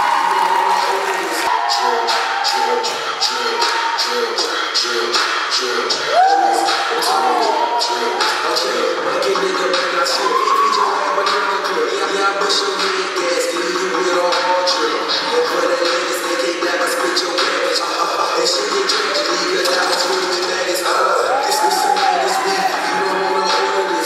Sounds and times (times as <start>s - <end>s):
Music: 0.0s - 24.0s.